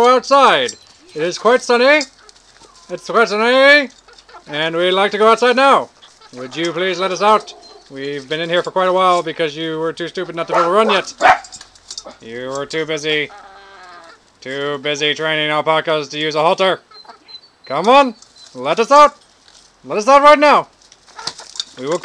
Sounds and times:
Speech: 0:00.0 - 0:02.1, 0:02.9 - 0:03.9, 0:04.5 - 0:11.2, 0:12.2 - 0:13.3, 0:14.4 - 0:16.8, 0:17.7 - 0:19.2, 0:19.9 - 0:20.7, 0:21.8 - 0:22.0
Chicken, rooster: 0:06.0 - 0:08.2, 0:13.2 - 0:14.3, 0:16.9 - 0:17.4, 0:21.1 - 0:21.6.

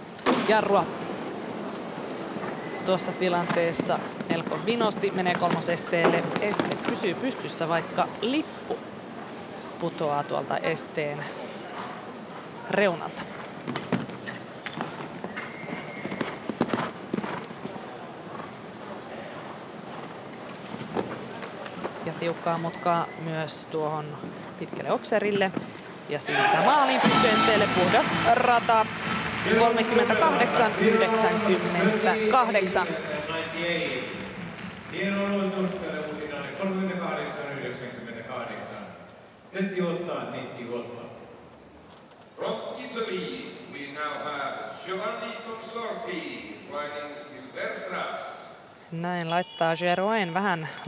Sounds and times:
Clip-clop: 0:02.4 - 0:07.6, 0:13.1 - 0:22.9.

